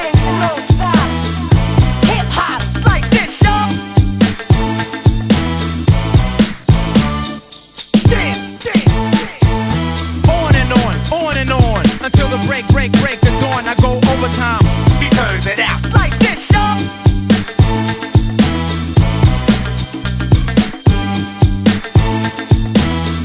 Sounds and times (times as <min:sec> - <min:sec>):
Music: 0:00.0 - 0:23.2.